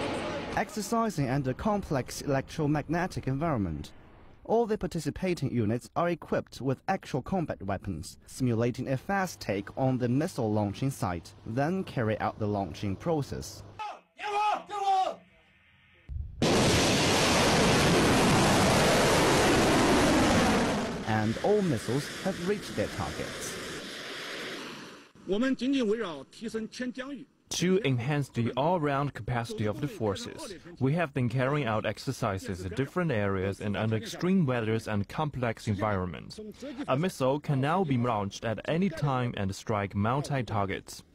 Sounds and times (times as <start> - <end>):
Speech: 0.5 - 3.9, 4.5 - 15.2, 21.1 - 23.5, 25.3 - 41.1.